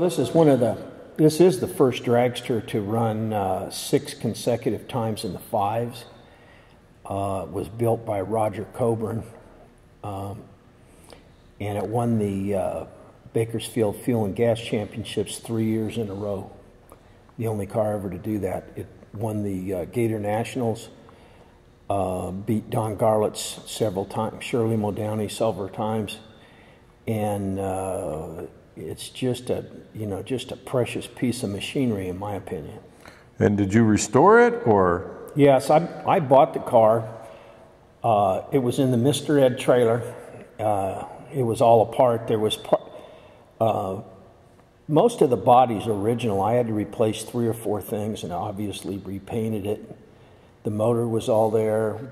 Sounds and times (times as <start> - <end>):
Speech: 0.0 - 6.1, 7.0 - 9.4, 10.0 - 10.6, 11.6 - 16.6, 17.4 - 21.0, 21.9 - 26.3, 27.1 - 37.2, 38.0 - 42.9, 43.6 - 44.2, 44.9 - 50.0, 50.6 - 52.1.